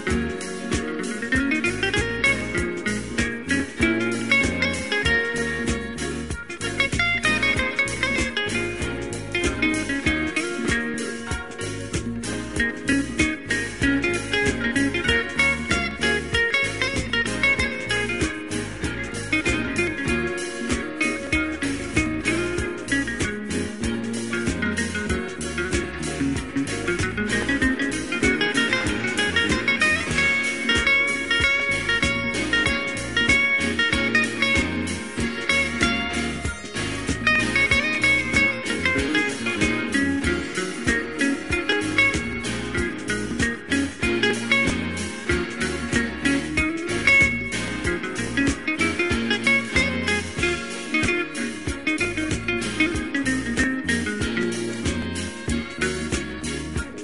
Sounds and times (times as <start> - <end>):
Music: 0.0 - 57.0.